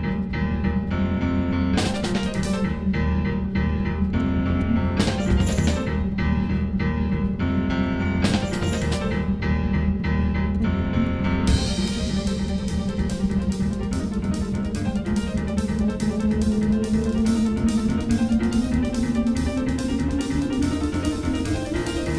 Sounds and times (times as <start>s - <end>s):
Music: 0.0s - 22.1s.